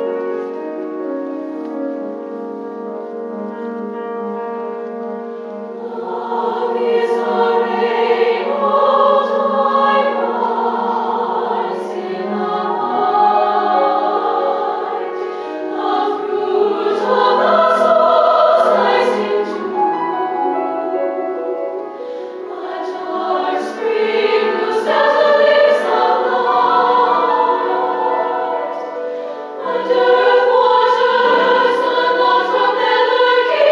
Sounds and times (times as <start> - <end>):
Music: 0.0 - 33.7.